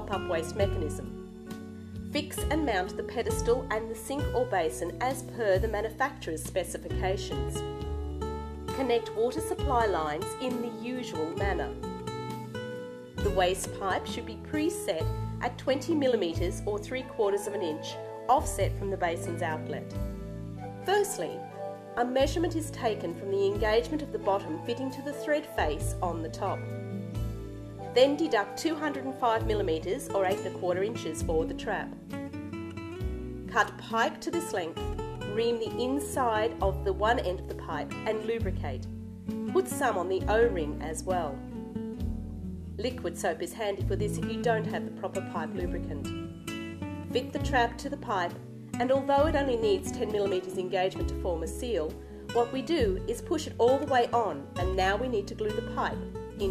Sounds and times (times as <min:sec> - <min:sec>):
Female speech, woman speaking: 0:00.0 - 0:01.1, 0:02.2 - 0:07.6, 0:08.8 - 0:11.8, 0:13.2 - 0:19.9, 0:20.9 - 0:21.4, 0:22.0 - 0:26.6, 0:28.0 - 0:32.0, 0:33.5 - 0:38.9, 0:39.5 - 0:41.4, 0:42.8 - 0:46.1, 0:47.2 - 0:56.5
Music: 0:00.0 - 0:56.5.